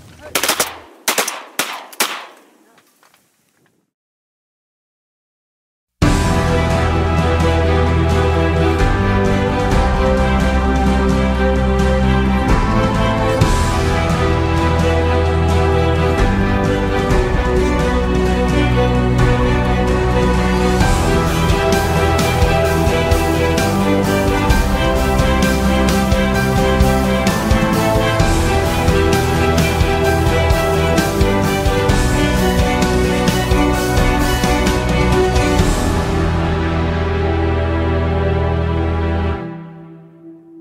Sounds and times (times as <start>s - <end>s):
Music: 6.0s - 40.6s.